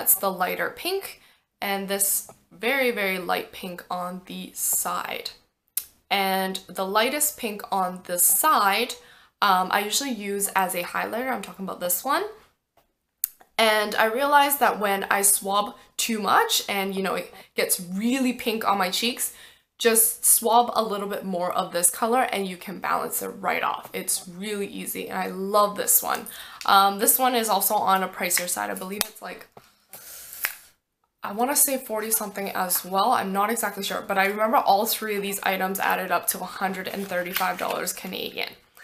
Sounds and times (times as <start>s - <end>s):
Speech: 0.0s - 5.4s, 6.1s - 12.4s, 13.6s - 29.5s, 31.2s - 38.6s
Inside, small room: 0.0s - 38.8s.